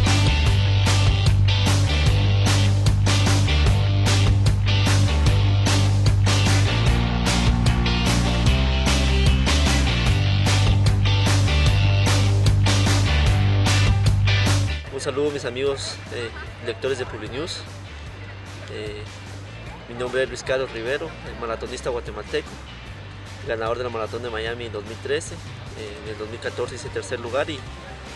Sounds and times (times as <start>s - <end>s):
Music: 0.0s - 28.1s
Outside, urban or manmade: 0.0s - 28.1s
Male speech, man speaking: 14.9s - 17.7s, 18.7s - 19.1s, 19.8s - 22.6s, 23.4s - 27.7s.